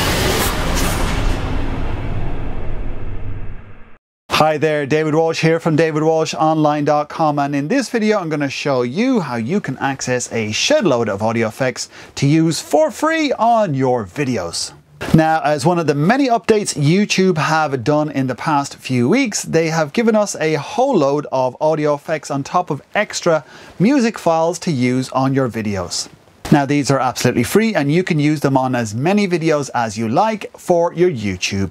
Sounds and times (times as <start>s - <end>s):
Speech: 4.3s - 31.7s.